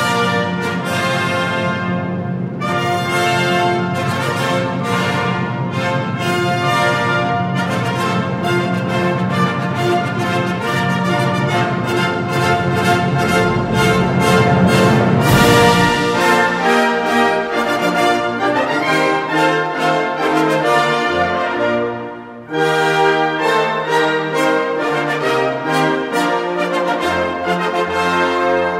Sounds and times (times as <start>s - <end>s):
Music: 0.0s - 28.8s.